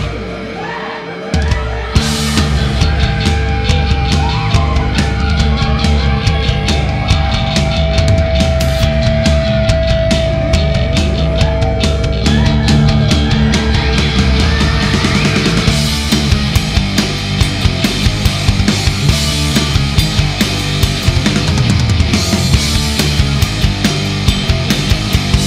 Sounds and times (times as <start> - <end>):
Music: 0.0 - 25.4.